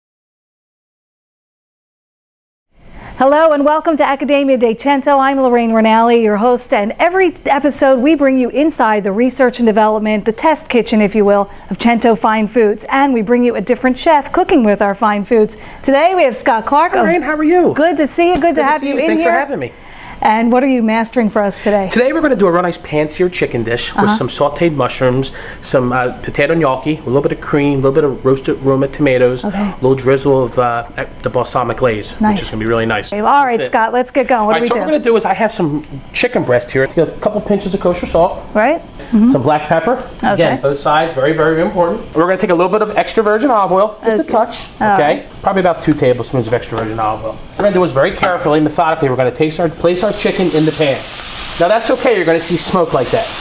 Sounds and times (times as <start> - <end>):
Speech: 15.9 - 19.7, 20.3 - 35.3, 36.2 - 53.3.